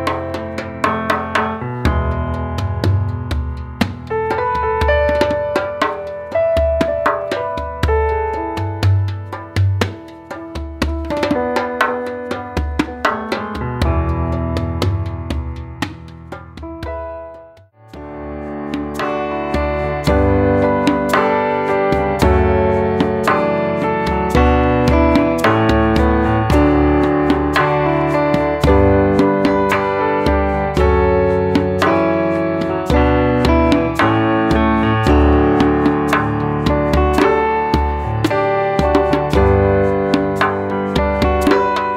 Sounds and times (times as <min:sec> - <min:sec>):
Music: 0:00.0 - 0:41.9.